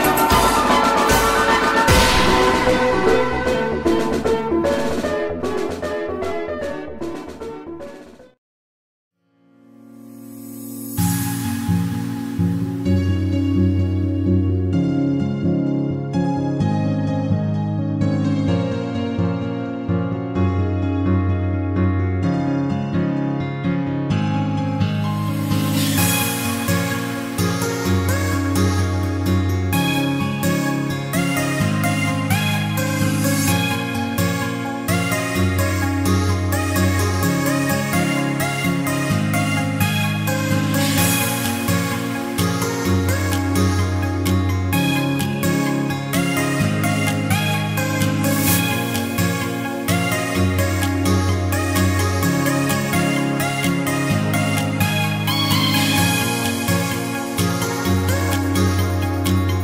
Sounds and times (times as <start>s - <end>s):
Music: 0.0s - 8.4s, 9.2s - 59.6s.